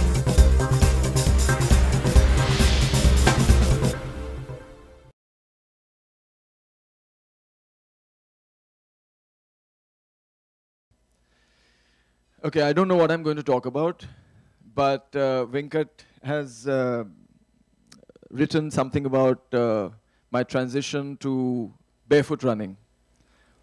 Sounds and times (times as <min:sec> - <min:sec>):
Speech: 0:12.4 - 0:14.1, 0:14.7 - 0:17.2, 0:18.0 - 0:22.8.